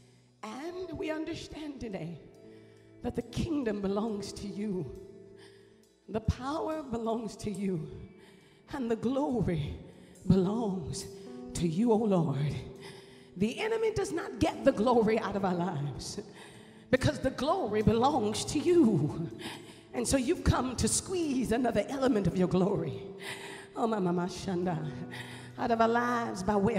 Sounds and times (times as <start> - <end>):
Music: 0.0 - 26.7
Speech: 0.4 - 2.2, 3.0 - 4.9, 6.1 - 8.0, 8.7 - 9.7, 10.3 - 12.7, 13.4 - 16.3, 16.9 - 19.3, 20.0 - 23.1, 23.8 - 25.0, 25.6 - 26.7.